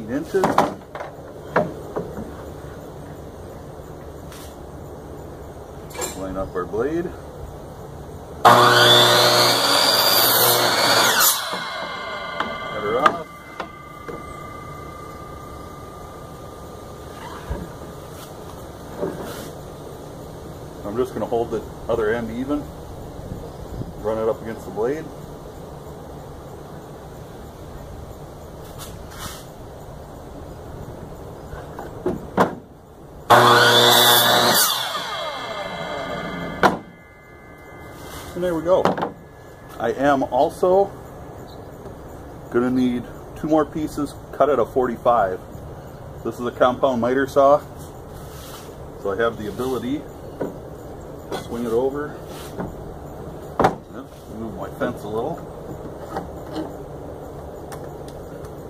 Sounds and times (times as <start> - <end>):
Power tool: 8.5 - 16.7, 33.3 - 39.2.